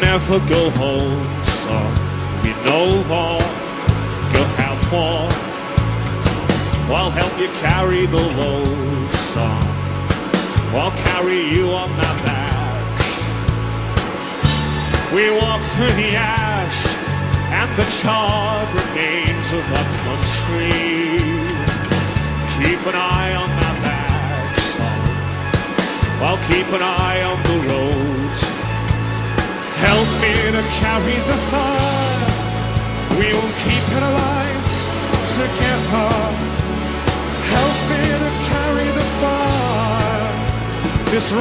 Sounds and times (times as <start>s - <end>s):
Music: 0.0s - 41.4s.